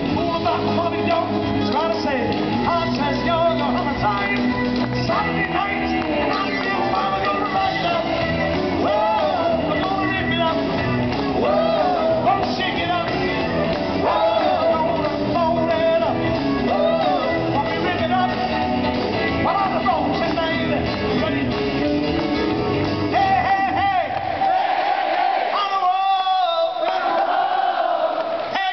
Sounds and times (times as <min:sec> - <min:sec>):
Music: 0:00.0 - 0:28.7.